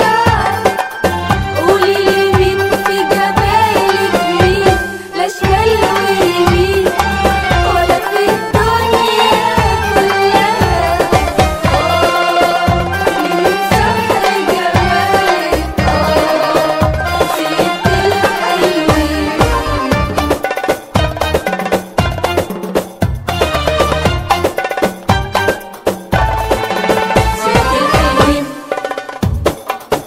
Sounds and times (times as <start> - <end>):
Folk music: 0.0 - 29.6
Happy music: 0.0 - 30.0.